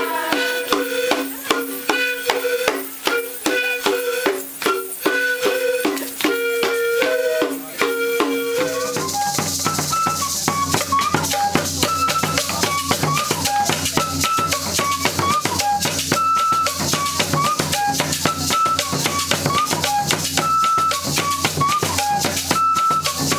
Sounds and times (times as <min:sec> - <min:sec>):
Music: 0:00.0 - 0:23.3.